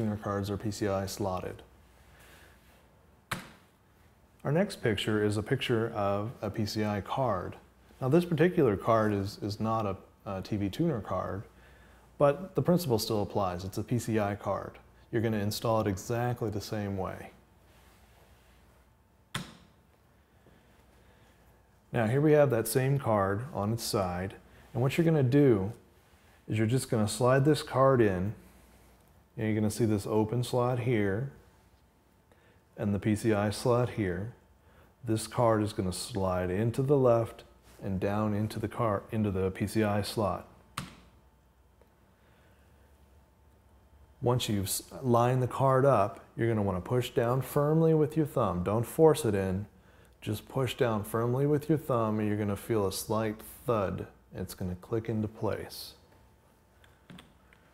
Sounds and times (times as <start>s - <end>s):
Speech: 0.0s - 1.7s, 4.4s - 11.5s, 12.2s - 17.4s, 21.9s - 25.8s, 26.5s - 28.4s, 29.4s - 31.4s, 32.8s - 34.4s, 35.0s - 40.6s, 44.2s - 56.1s.